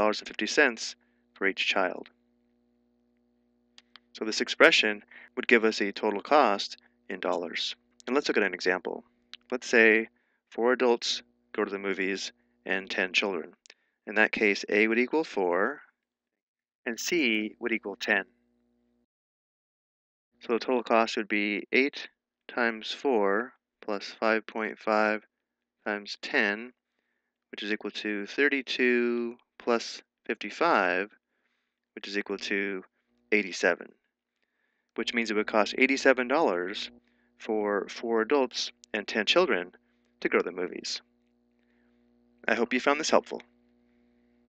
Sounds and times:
Speech: 0.0 - 2.1, 4.2 - 15.8, 16.9 - 18.2, 20.4 - 25.2, 25.9 - 26.7, 27.6 - 31.1, 32.0 - 32.8, 33.4 - 33.9, 35.0 - 41.0, 42.5 - 43.4.

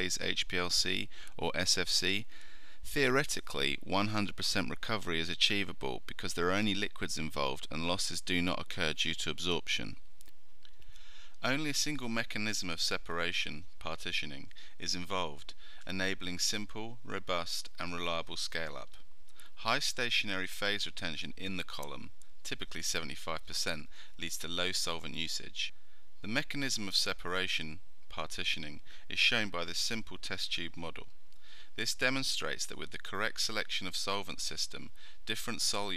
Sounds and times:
Speech: 0.0 - 2.3, 2.9 - 10.0, 11.4 - 19.0, 19.6 - 31.1, 31.8 - 35.9.

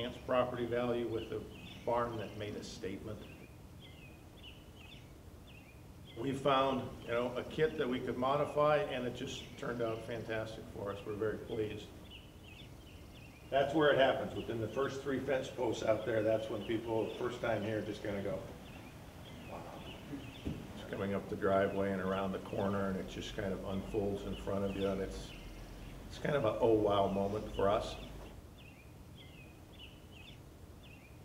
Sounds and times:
Speech: 0.0 - 3.3, 6.2 - 12.0, 13.5 - 18.5, 20.8 - 25.4, 26.1 - 28.2.

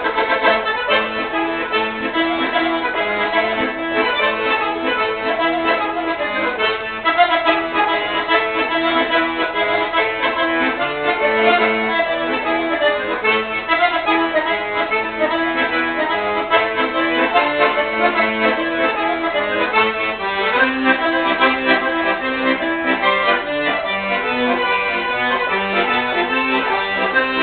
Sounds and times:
Music: 0.0 - 27.4.

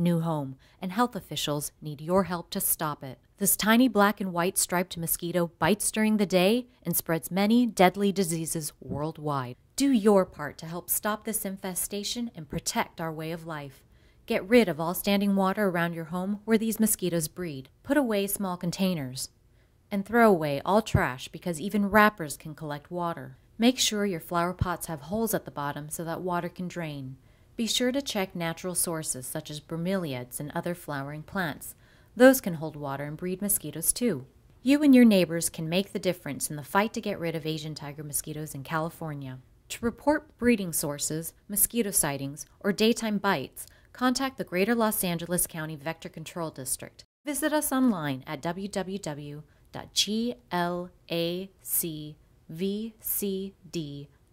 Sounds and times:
Speech: 0.0 - 19.3, 19.9 - 54.1.

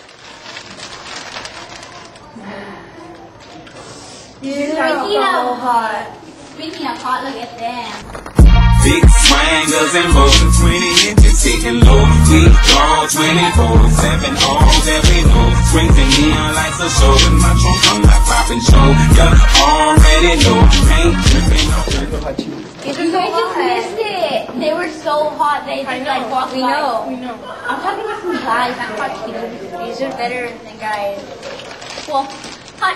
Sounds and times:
Music: 8.3 - 22.3.

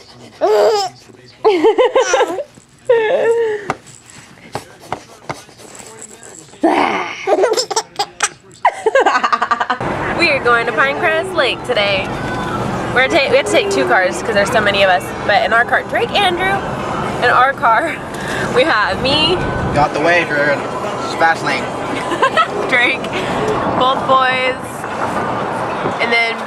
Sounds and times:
Baby laughter: 0.4 - 2.5, 7.2 - 9.5.

